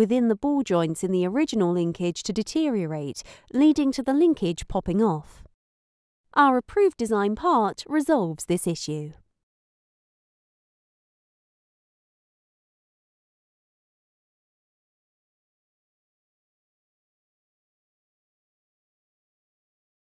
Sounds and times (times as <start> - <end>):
Speech: 0.0 - 5.4, 6.4 - 9.2.